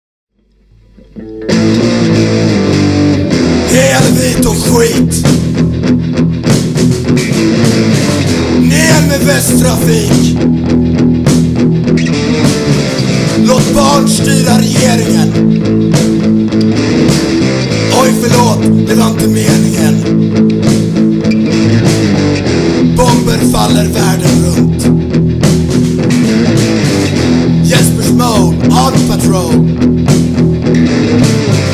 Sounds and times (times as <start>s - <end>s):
Music: 0.3s - 31.7s
Rapping: 3.7s - 5.2s, 8.6s - 10.3s, 13.4s - 15.4s, 17.9s - 20.0s, 23.0s - 24.8s, 27.6s - 29.6s.